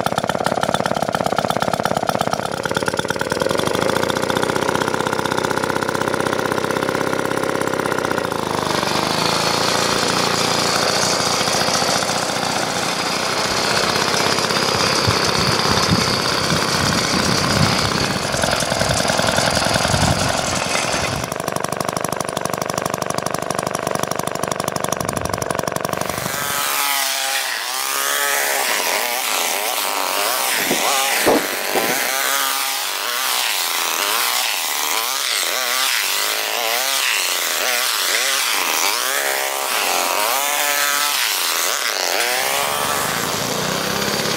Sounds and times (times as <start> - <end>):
Lawn mower: 0.0 - 44.3.